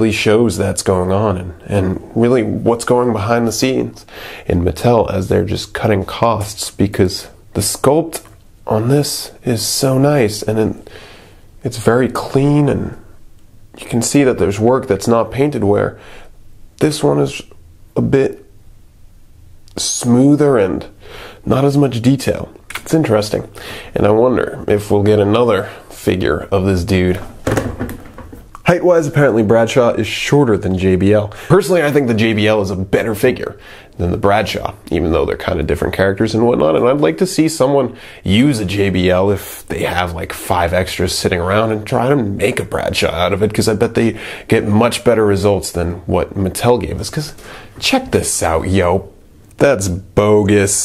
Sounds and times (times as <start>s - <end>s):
Speech: 0.0s - 10.9s, 11.6s - 13.1s, 13.8s - 16.0s, 16.8s - 18.5s, 19.7s - 27.3s, 28.6s - 50.8s.